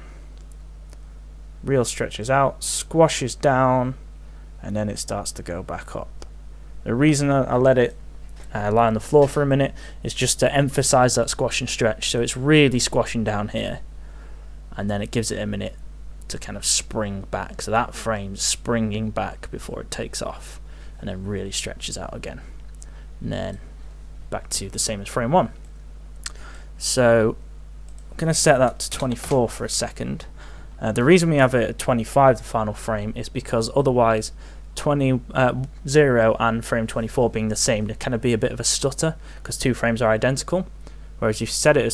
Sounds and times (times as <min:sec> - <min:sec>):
Speech: 0:01.6 - 0:04.0, 0:04.6 - 0:06.1, 0:06.8 - 0:13.8, 0:14.7 - 0:22.5, 0:23.2 - 0:23.7, 0:24.3 - 0:25.6, 0:26.8 - 0:27.4, 0:28.2 - 0:41.9.